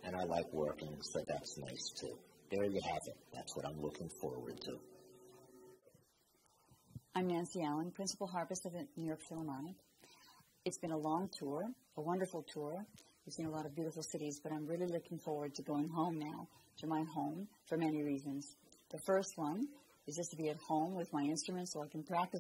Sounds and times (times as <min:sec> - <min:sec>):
Speech: 0:00.0 - 0:04.8, 0:07.2 - 0:09.8, 0:10.7 - 0:22.4.